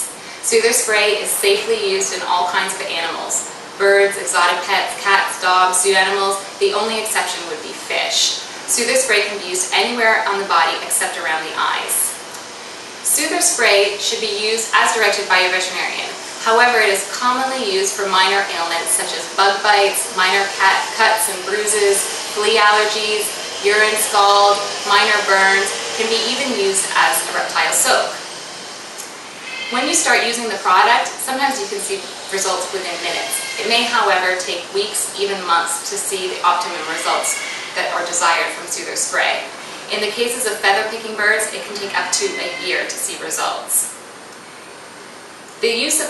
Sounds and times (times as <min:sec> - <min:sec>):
Speech: 0:00.0 - 0:12.2, 0:13.1 - 0:28.2, 0:29.7 - 0:44.0, 0:45.6 - 0:46.0.